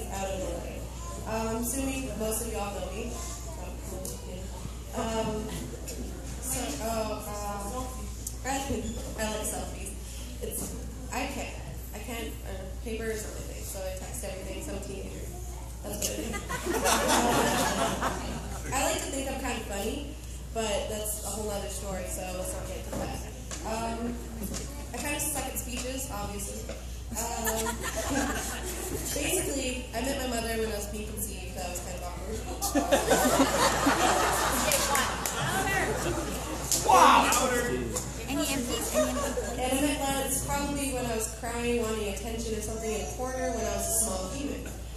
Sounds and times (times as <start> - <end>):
Female speech, woman speaking: 0.0 - 5.8, 6.4 - 16.6, 17.2 - 32.9, 34.5 - 44.8.